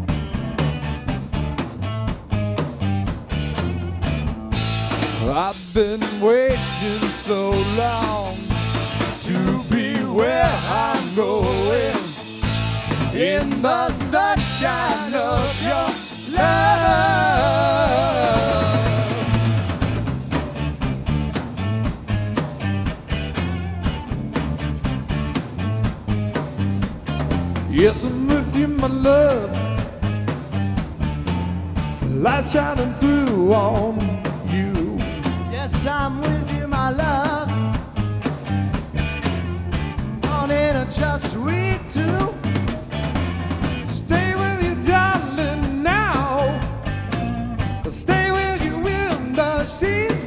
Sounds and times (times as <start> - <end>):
Guitar: 0.0 - 50.2
Psychedelic rock: 0.0 - 50.2.